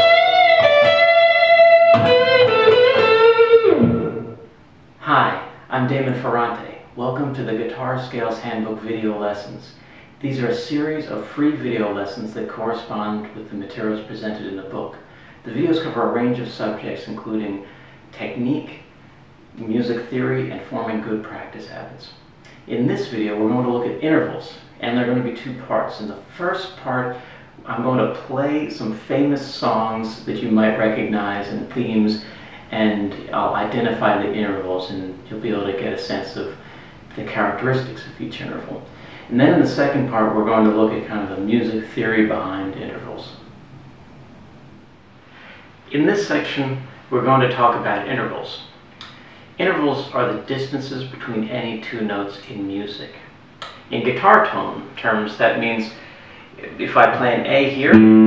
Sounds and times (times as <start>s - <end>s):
Speech: 5.0s - 19.0s, 19.6s - 43.5s, 45.9s - 58.2s.